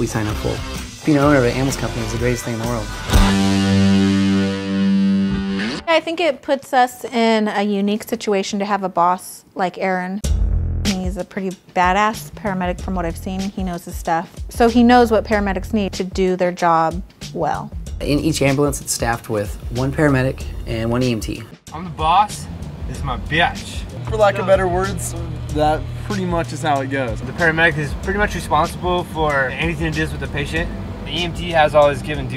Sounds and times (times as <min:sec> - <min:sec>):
Speech: 0:00.0 - 0:02.9, 0:10.9 - 0:32.3
Music: 0:00.0 - 0:06.3, 0:10.2 - 0:32.3.